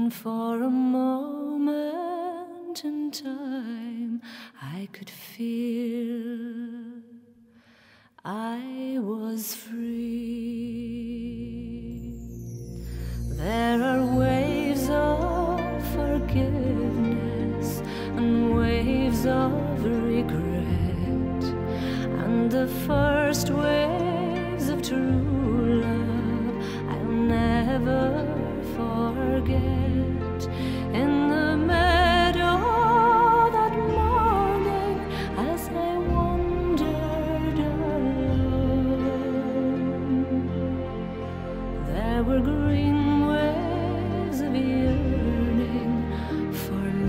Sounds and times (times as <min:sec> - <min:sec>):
Music: 0:00.0 - 0:47.0.